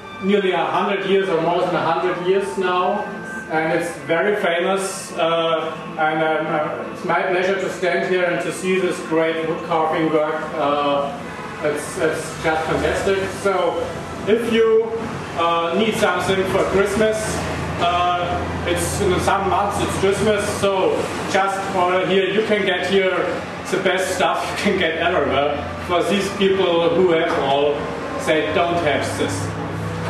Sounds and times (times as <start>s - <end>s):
Speech: 0.2s - 29.6s.